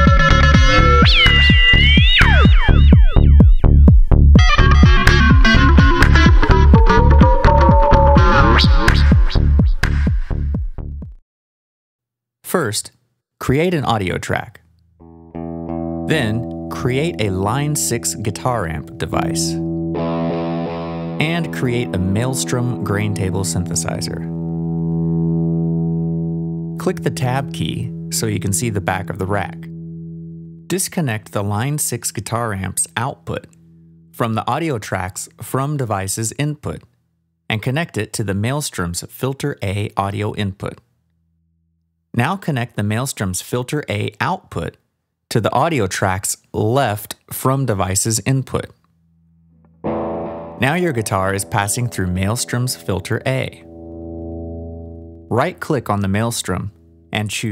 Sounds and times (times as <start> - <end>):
Speech: 12.5 - 14.6, 16.1 - 19.6, 21.2 - 24.3, 26.8 - 29.7, 30.7 - 33.5, 34.2 - 36.9, 37.5 - 40.8, 42.2 - 48.8, 50.6 - 53.6, 55.3 - 57.5
Electric guitar: 15.0 - 30.7, 49.6 - 57.4.